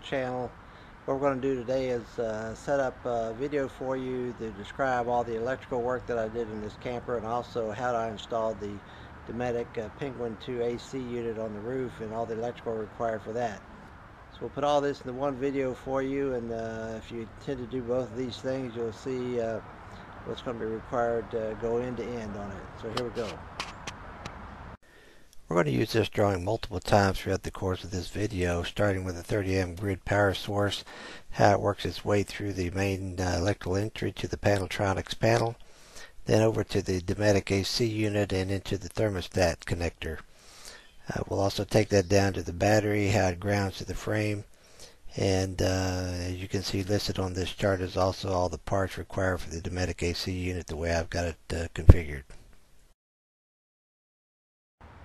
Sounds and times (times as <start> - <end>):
Speech: 0.0 - 13.6, 14.4 - 19.6, 20.3 - 23.4, 25.5 - 35.6, 36.2 - 40.2, 41.1 - 44.5, 45.1 - 52.4.